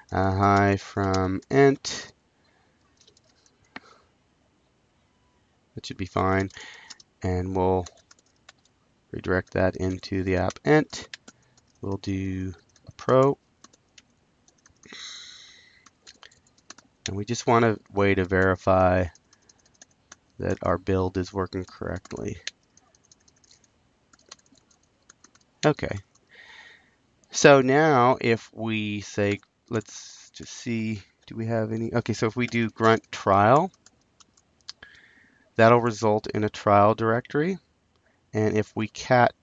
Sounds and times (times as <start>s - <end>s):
Speech: 0.0s - 2.1s, 5.8s - 7.9s, 9.2s - 11.1s, 11.8s - 13.4s, 17.1s - 19.2s, 20.4s - 22.5s, 25.6s - 26.0s, 27.3s - 33.7s, 35.6s - 37.6s, 38.4s - 39.4s.